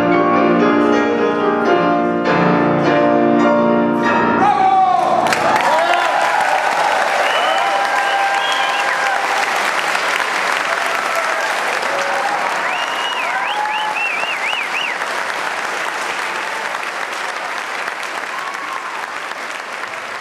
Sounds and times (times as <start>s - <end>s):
Applause: 5.0s - 20.2s.